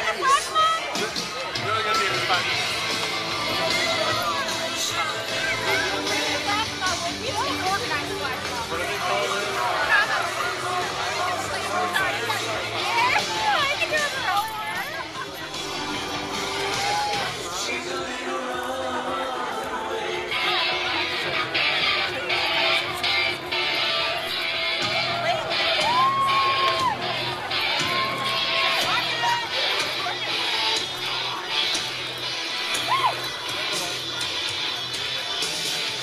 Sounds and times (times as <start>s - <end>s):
Speech: 0.0s - 16.1s, 16.8s - 36.0s.